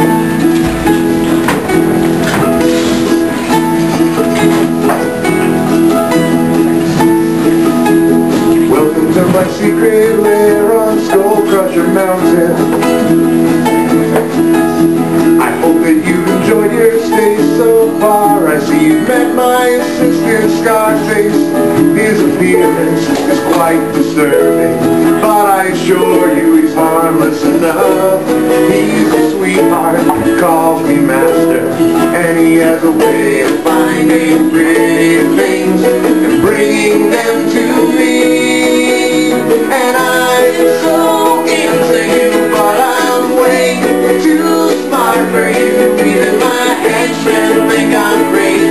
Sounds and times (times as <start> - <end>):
Inside, large room or hall: 0.0 - 48.7
Ukulele: 0.0 - 48.7.